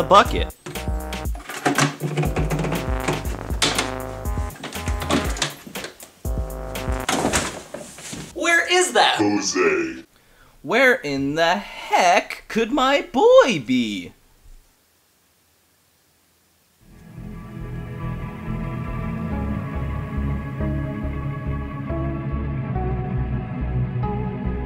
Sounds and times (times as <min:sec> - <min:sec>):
Speech: 0:00.0 - 0:00.5, 0:08.4 - 0:14.2
Music: 0:00.0 - 0:07.4, 0:16.9 - 0:24.6.